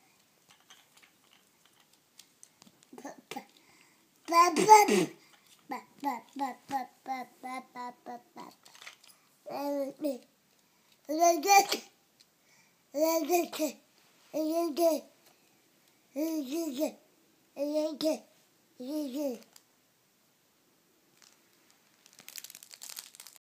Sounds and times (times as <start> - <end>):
Babbling: 3.0 - 3.6, 4.3 - 8.6, 9.5 - 10.3, 11.1 - 11.9, 13.0 - 13.8, 14.4 - 15.1, 16.2 - 17.0, 17.6 - 19.5.